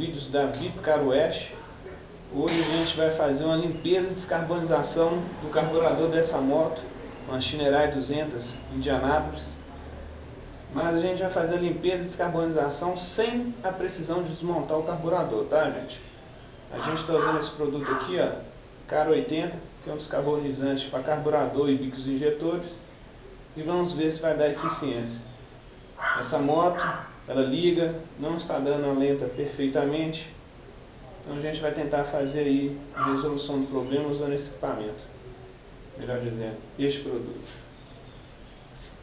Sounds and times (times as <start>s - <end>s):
Speech: 0.0s - 10.1s, 10.7s - 16.1s, 16.7s - 22.8s, 23.6s - 25.3s, 26.2s - 30.4s, 31.0s - 35.2s, 36.0s - 37.6s.